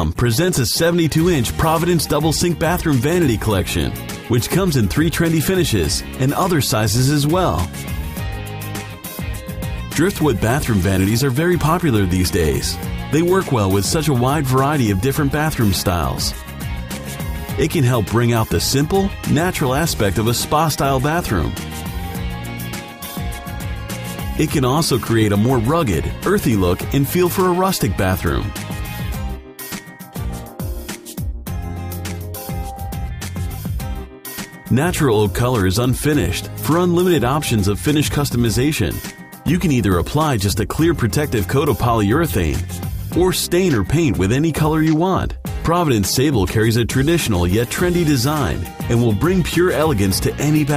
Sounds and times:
Speech: 0:00.0 - 0:07.7, 0:10.0 - 0:16.4, 0:17.6 - 0:21.6, 0:24.4 - 0:28.6, 0:34.7 - 0:50.7
Music: 0:00.0 - 0:50.7.

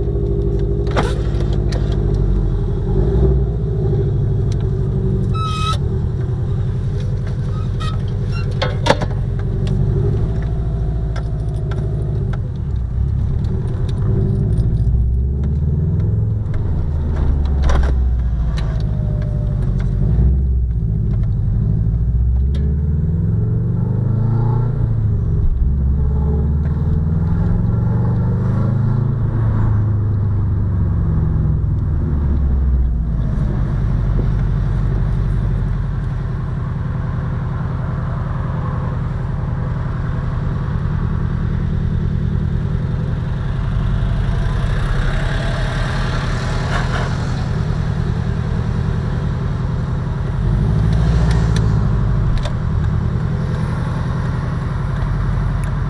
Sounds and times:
Car: 0:00.0 - 0:55.8.

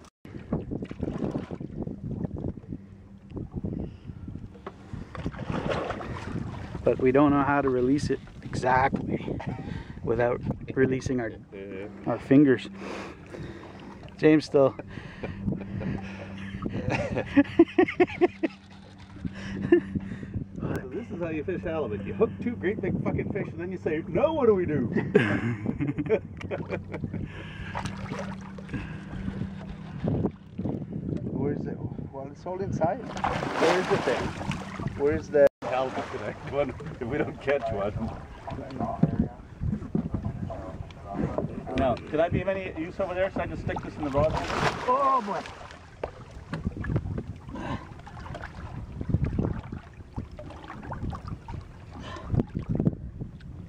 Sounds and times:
Ocean: 0:00.0 - 0:53.6.

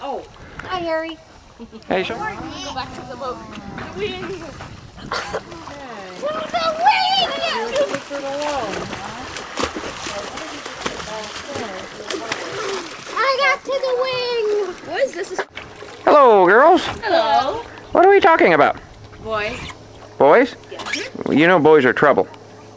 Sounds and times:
Splash, splatter: 0:05.3 - 0:13.4.

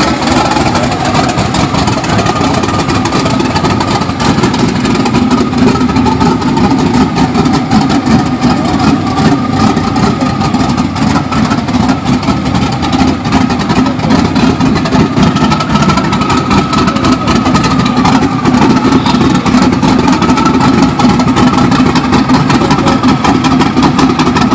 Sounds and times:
Vehicle: 0:00.0 - 0:24.5.

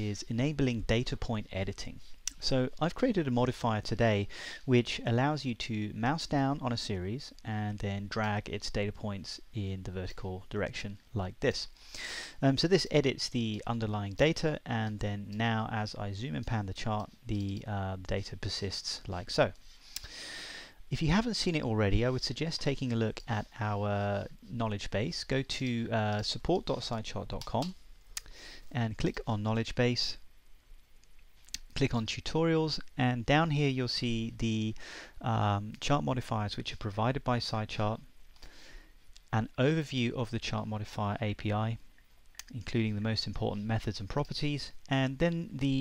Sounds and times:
Speech: 0:00.0 - 0:11.7, 0:12.4 - 0:19.6, 0:20.9 - 0:27.8, 0:28.7 - 0:30.2, 0:31.6 - 0:38.1, 0:39.3 - 0:41.8, 0:42.4 - 0:45.8.

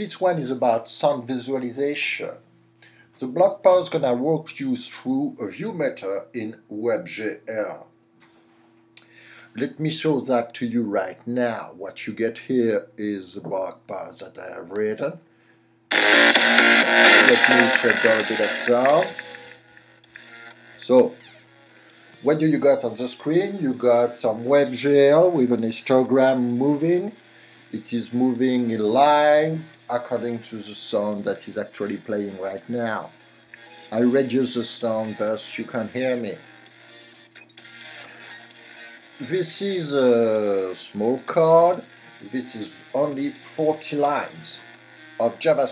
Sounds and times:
Speech: 0:00.0 - 0:02.4, 0:03.2 - 0:07.9, 0:09.6 - 0:15.2, 0:17.2 - 0:19.2, 0:20.8 - 0:21.2, 0:22.2 - 0:27.2, 0:27.8 - 0:33.1, 0:34.0 - 0:36.4, 0:39.2 - 0:44.6, 0:45.2 - 0:45.7.

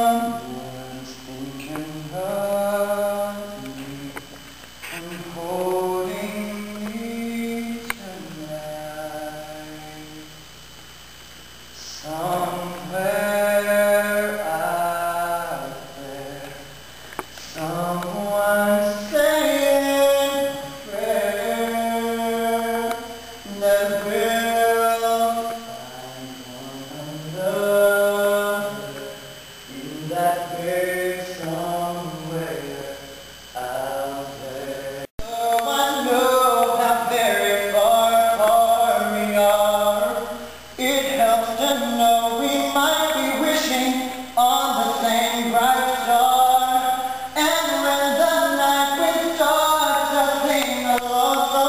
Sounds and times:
Male singing: 0:00.0 - 0:04.3, 0:04.9 - 0:10.3, 0:11.8 - 0:16.8, 0:17.4 - 0:51.6.

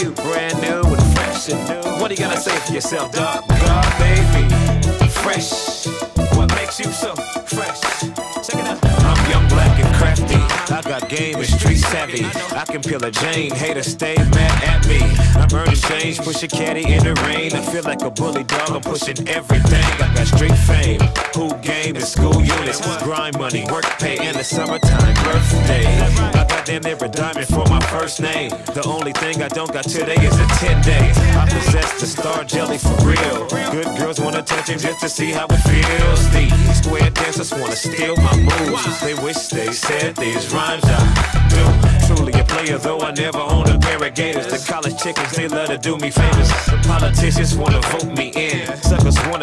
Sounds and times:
Dance music: 0:00.0 - 0:49.4.

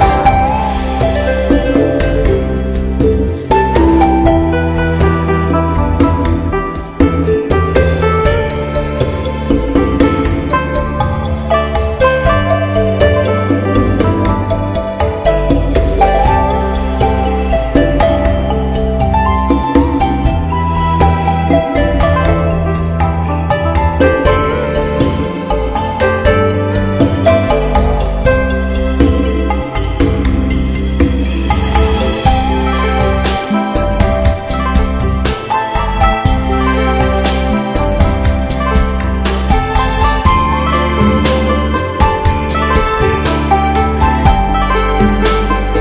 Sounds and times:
New-age music: 0:00.0 - 0:45.8.

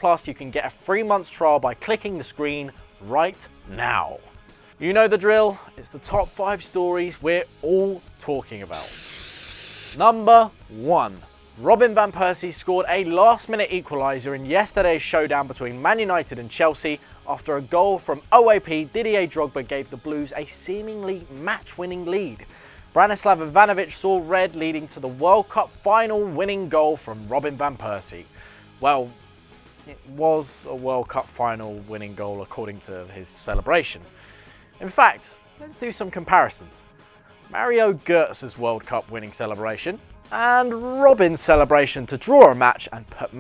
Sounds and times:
Speech: 0:00.0 - 0:08.9, 0:10.0 - 0:29.2, 0:29.8 - 0:34.1, 0:34.8 - 0:36.8, 0:37.5 - 0:43.4
Music: 0:00.0 - 0:43.4
Spray: 0:08.7 - 0:10.0.

